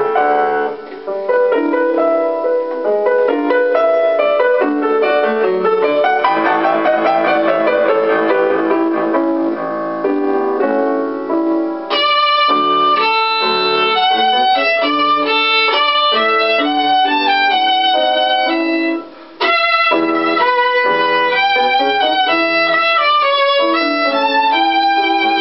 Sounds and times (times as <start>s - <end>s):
Violin, fiddle: 11.9s - 25.4s.